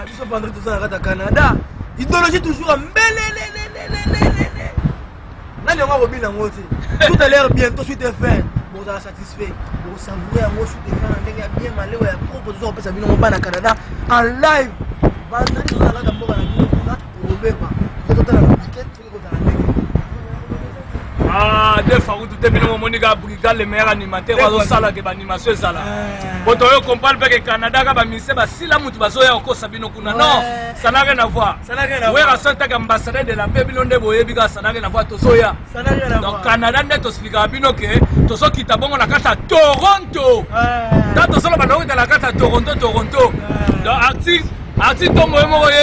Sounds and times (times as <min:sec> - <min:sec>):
Speech: 0:20.2 - 0:45.8.